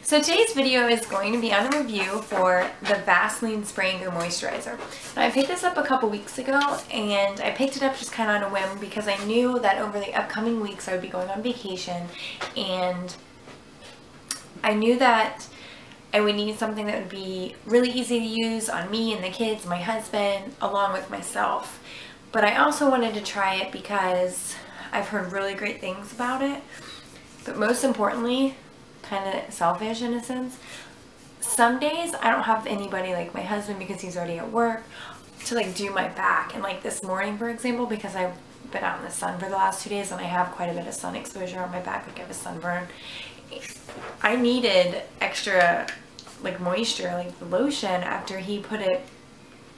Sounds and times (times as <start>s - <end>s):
Speech: 0.0s - 13.2s, 14.6s - 15.5s, 16.1s - 21.8s, 22.4s - 26.7s, 27.4s - 30.6s, 31.4s - 42.9s, 43.5s - 49.1s.